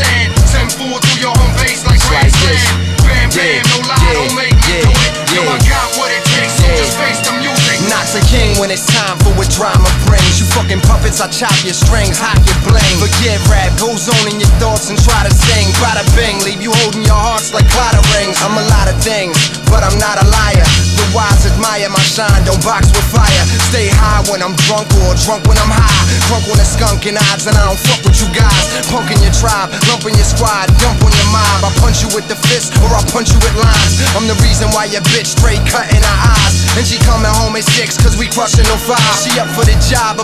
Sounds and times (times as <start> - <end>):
Funk: 0.0 - 40.2
Pop music: 0.0 - 40.2.